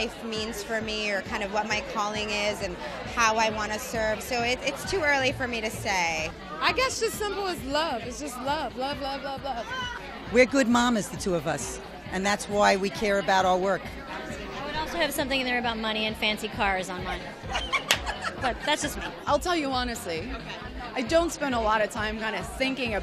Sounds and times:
Female speech, woman speaking: 0.0 - 13.9, 14.6 - 17.3, 18.4 - 23.0
Chatter: 0.0 - 23.0
Music: 0.0 - 23.0.

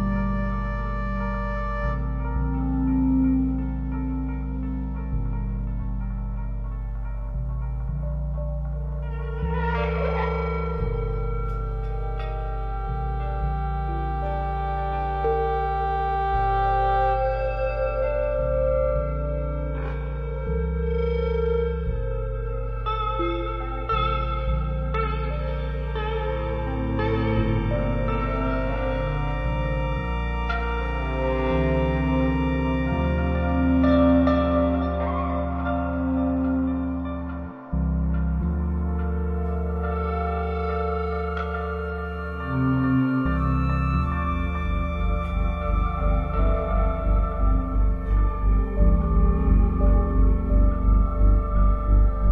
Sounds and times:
Music: 0.0 - 52.3.

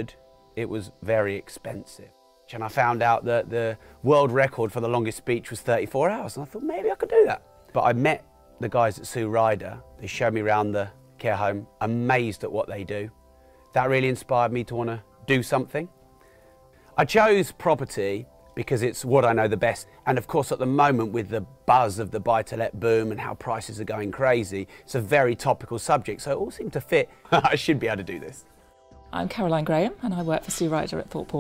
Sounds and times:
Male speech, man speaking: 0.0 - 13.1, 13.8 - 15.9, 17.0 - 28.4
Narration, monologue: 0.0 - 31.4.

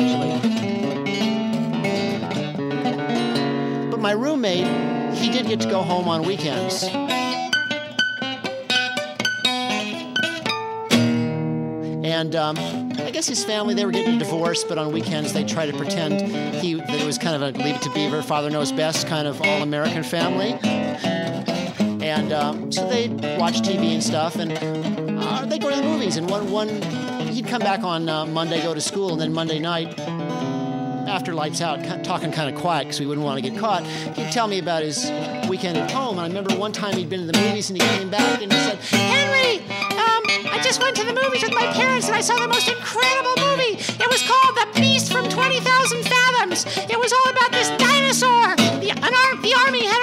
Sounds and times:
Tapping (guitar technique): 0.0 - 50.0.

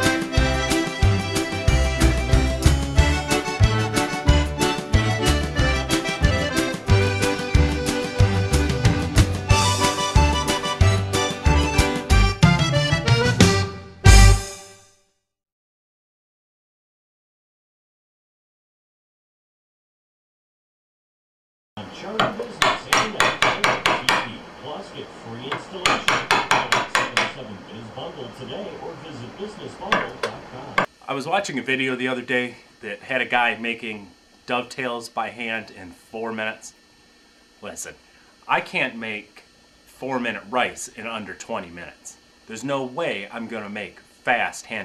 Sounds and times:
Television: 21.8 - 31.6
Speech: 21.8 - 36.8, 37.6 - 44.8
Wood: 22.2 - 24.3, 25.8 - 27.4.

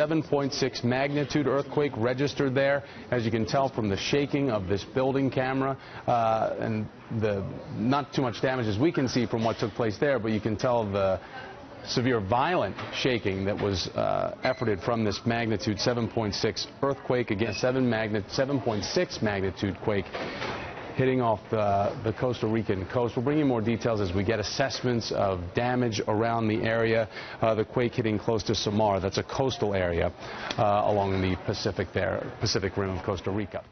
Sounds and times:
Speech: 0.0 - 20.1, 21.0 - 33.7.

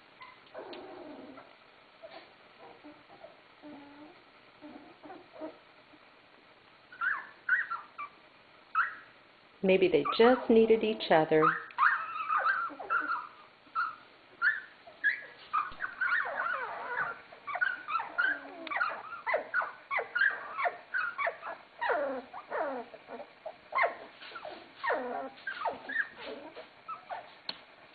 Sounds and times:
Dog: 0.2 - 5.6, 11.4 - 27.5
Speech: 9.6 - 11.6.

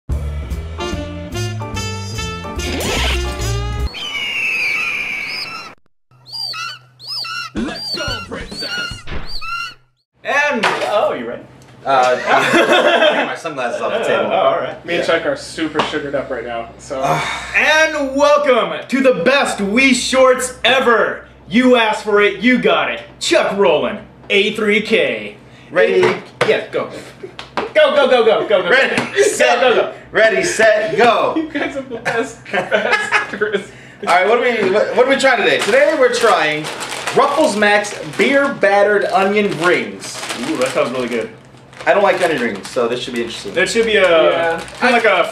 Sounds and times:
Music: 0.1 - 3.9.

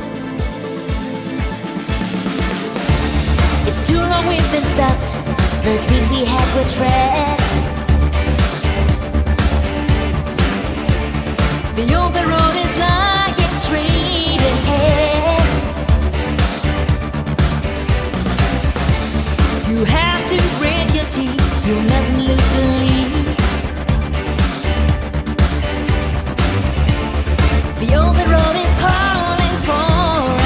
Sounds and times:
Exciting music: 0.0 - 30.4.

